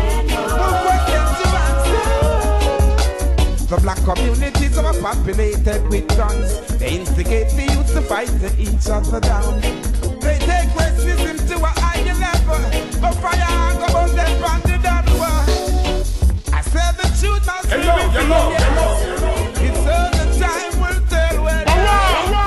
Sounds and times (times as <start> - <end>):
Reggae: 0.0 - 22.4.